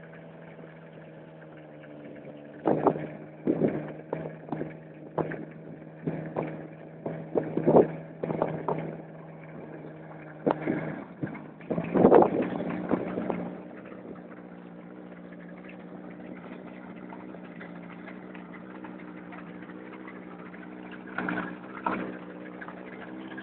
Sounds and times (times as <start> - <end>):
Sailboat, sailing ship: 0.0 - 23.4.